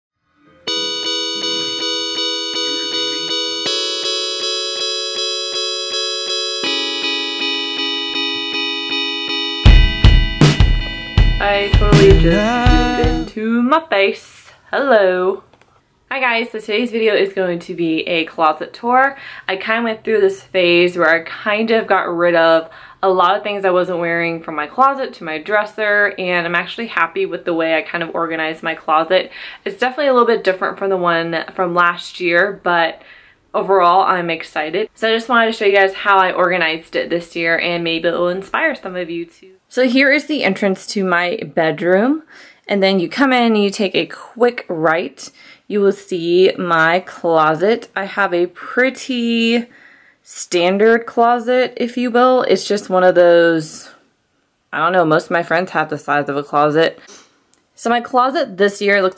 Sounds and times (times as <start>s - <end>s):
Music: 0.2s - 13.3s.